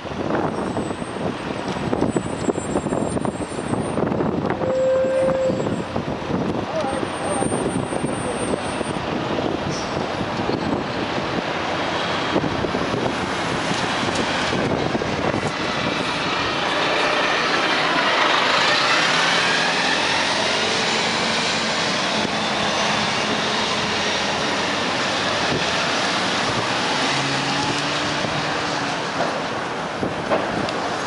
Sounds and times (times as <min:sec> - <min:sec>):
Bus: 0:00.0 - 0:31.0.